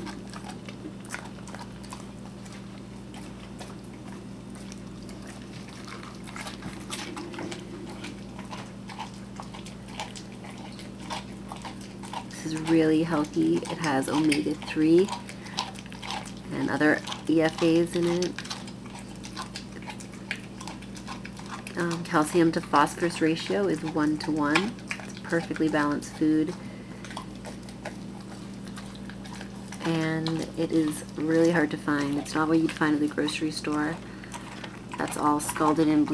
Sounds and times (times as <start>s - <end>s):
Speech: 12.4s - 15.2s, 16.5s - 18.4s, 21.8s - 26.6s, 29.8s - 34.0s, 35.0s - 36.1s.